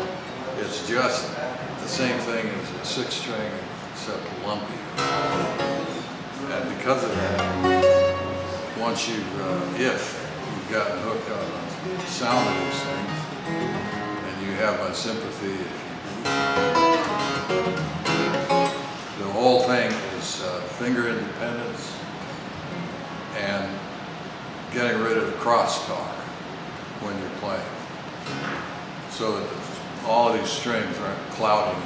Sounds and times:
Speech: 0.0s - 7.6s, 8.7s - 13.2s, 14.2s - 16.0s, 19.2s - 22.1s, 23.4s - 23.9s, 24.7s - 26.4s, 27.0s - 27.8s, 29.1s - 31.8s
Strum: 5.0s - 6.2s, 6.8s - 14.7s, 16.1s - 19.1s.

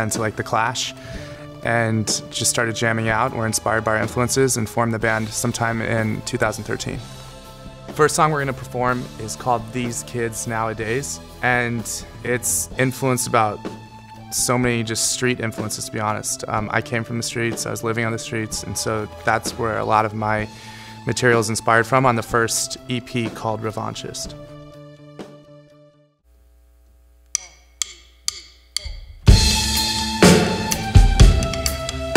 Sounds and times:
Speech: 0.0s - 1.0s, 1.6s - 7.0s, 8.0s - 13.7s, 14.3s - 24.4s
Music: 0.0s - 26.3s, 27.4s - 32.1s.

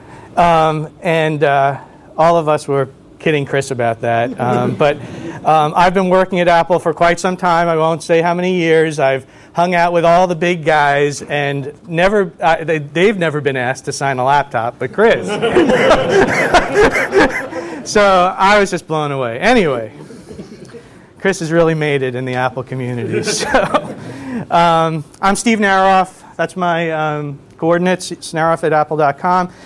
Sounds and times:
Speech: 0.4s - 15.4s, 17.9s - 20.0s, 21.2s - 23.6s, 24.5s - 29.5s.

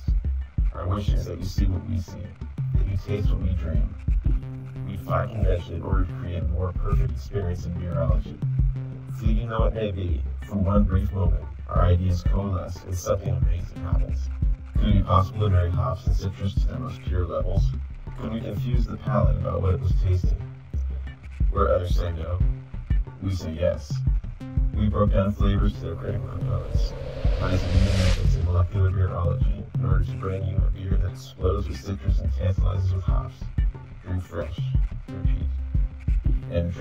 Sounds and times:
Speech: 0.0s - 4.0s, 4.9s - 8.4s, 9.1s - 20.5s, 21.5s - 22.5s, 23.2s - 24.0s, 24.8s - 35.6s, 36.4s - 36.8s
Music: 0.0s - 36.8s.

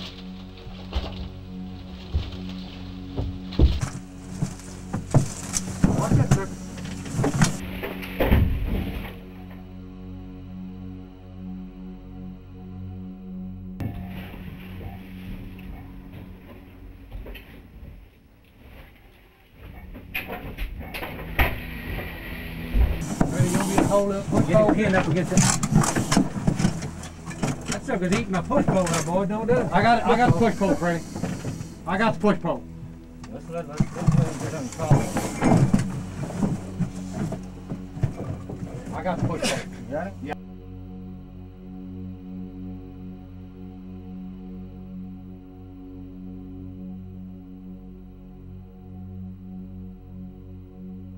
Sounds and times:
Speech: 23.3s - 25.5s, 27.8s - 31.0s, 31.9s - 32.6s, 33.3s - 35.2s, 38.9s - 40.4s.

